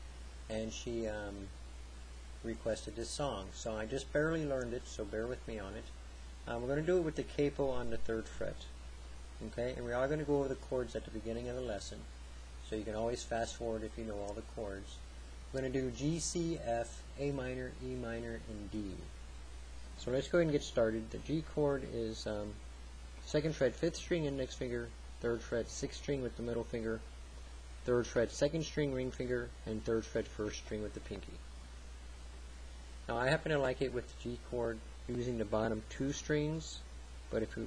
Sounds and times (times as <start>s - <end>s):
Speech: 0.5s - 1.6s, 2.4s - 8.8s, 9.4s - 19.1s, 20.0s - 22.6s, 23.2s - 27.1s, 27.8s - 31.5s, 33.1s - 37.6s.